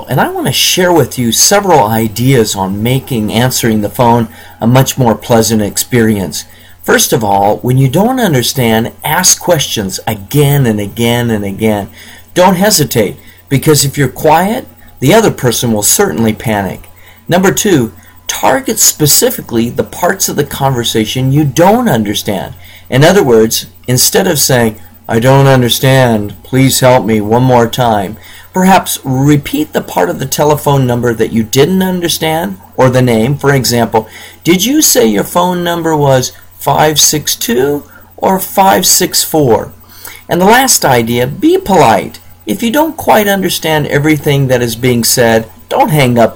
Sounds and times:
Speech: 0.0 - 46.3.

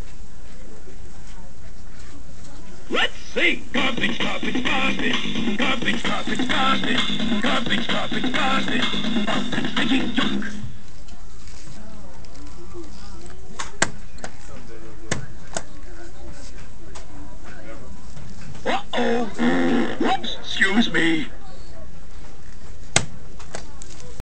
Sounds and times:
Speech: 0.1 - 4.0, 9.9 - 22.4.

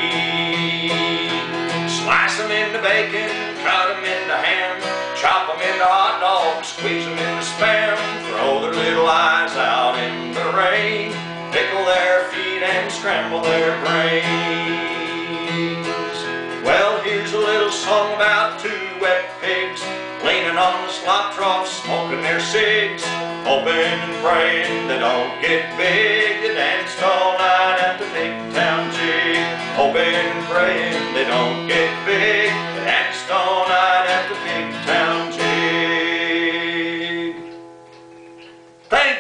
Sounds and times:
Guitar: 0.0 - 39.2
Singing: 2.0 - 15.5, 16.7 - 37.4.

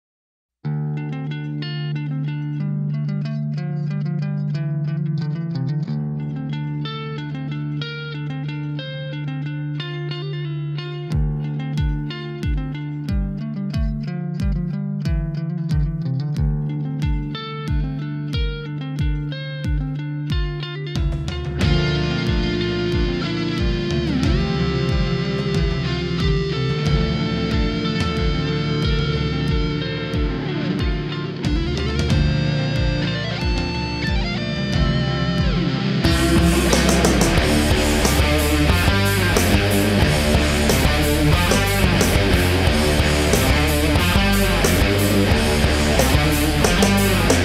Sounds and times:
Bass guitar: 0.6 - 47.4.

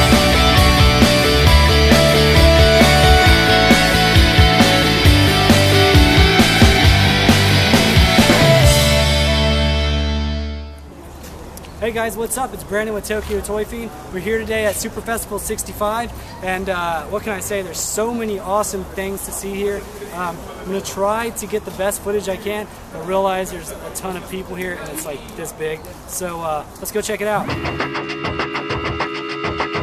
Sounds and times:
Music: 0.0 - 10.8, 27.5 - 29.8
Speech: 11.8 - 27.5.

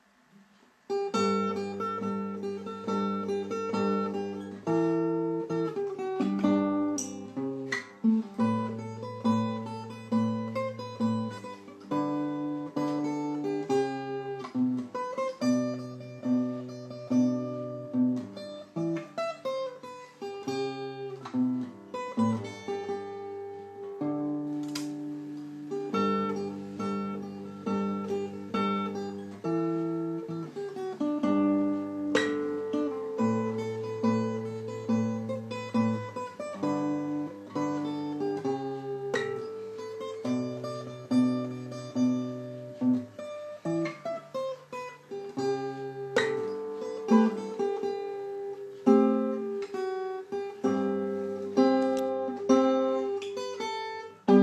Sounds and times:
Acoustic guitar: 0.0 - 54.4
Strum: 0.3 - 54.4.

